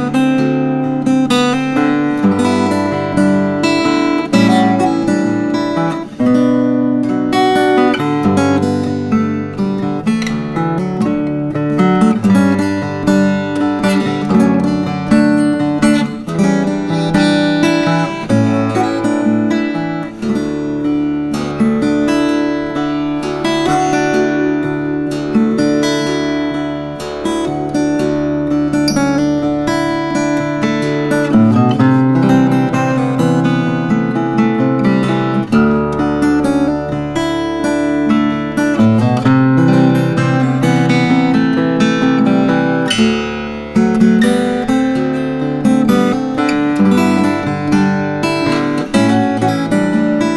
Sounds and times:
Guitar: 0.0 - 50.3.

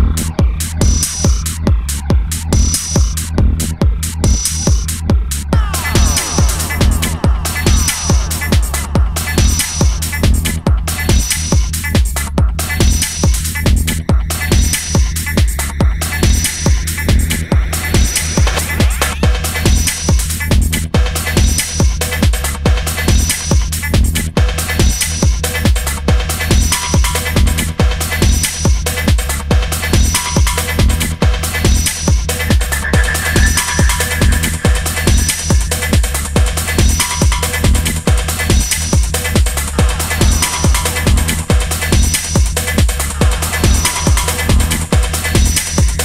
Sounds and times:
Music: 0.0 - 46.0.

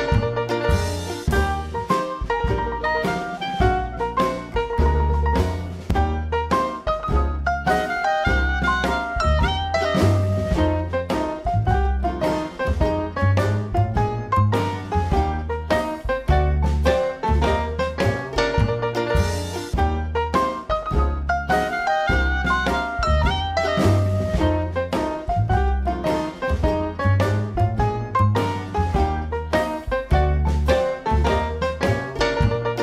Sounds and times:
Music: 0.0 - 32.8.

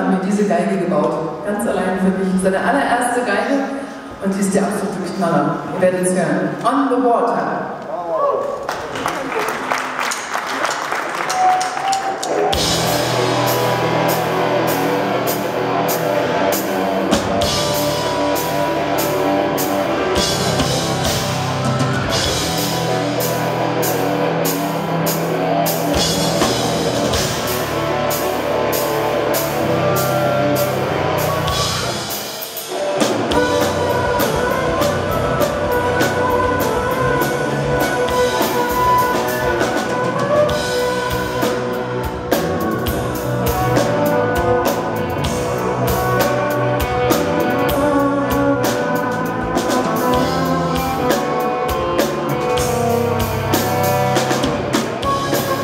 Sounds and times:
Musical instrument: 11.2 - 55.6.

